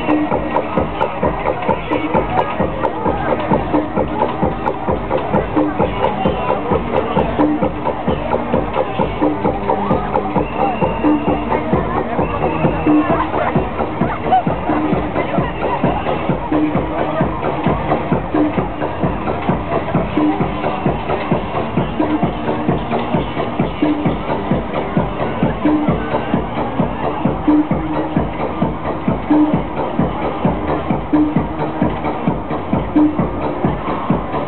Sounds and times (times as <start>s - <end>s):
Techno: 0.0s - 34.4s.